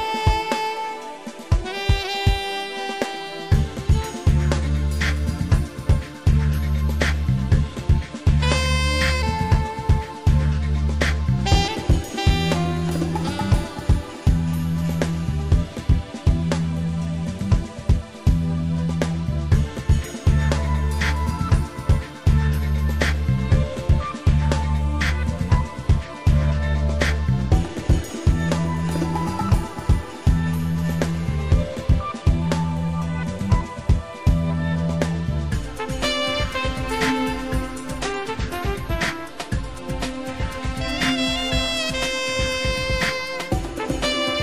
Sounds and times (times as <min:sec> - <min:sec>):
Music: 0:00.0 - 0:44.4.